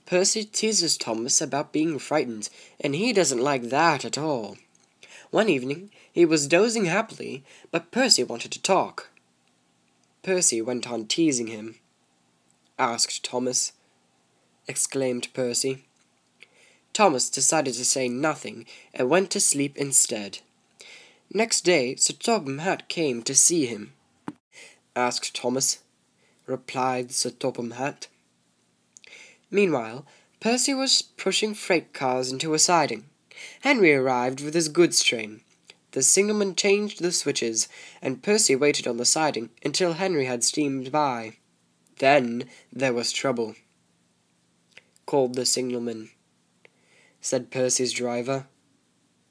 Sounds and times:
Narration, monologue: 0.0s - 49.3s.

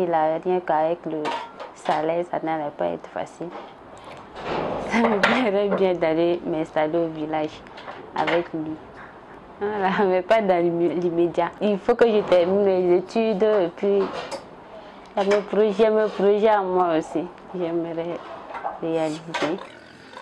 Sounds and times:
Speech: 0.0s - 3.6s, 4.9s - 7.6s, 8.2s - 8.8s, 9.6s - 14.2s, 15.2s - 18.2s, 18.8s - 19.6s.

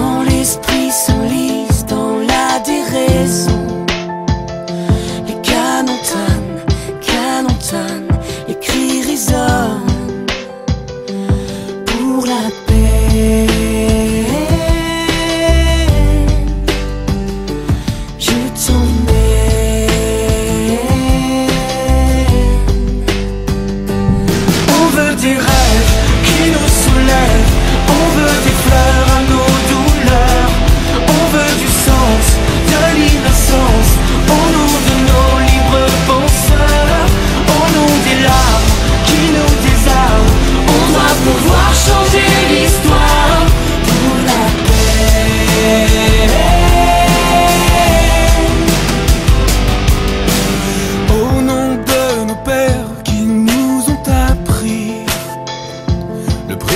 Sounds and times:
Music: 0.0s - 56.7s.

